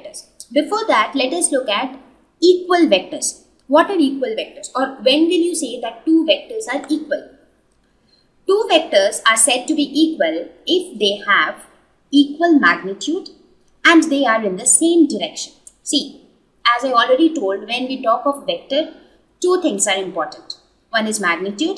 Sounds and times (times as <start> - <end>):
Speech: 0.0 - 7.4, 8.5 - 21.7.